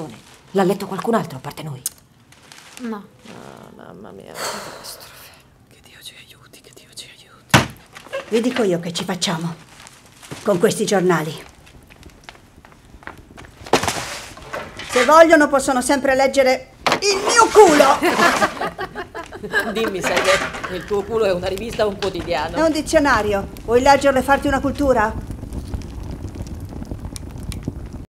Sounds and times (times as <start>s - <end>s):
Speech: 15.0s - 18.0s, 19.6s - 25.2s.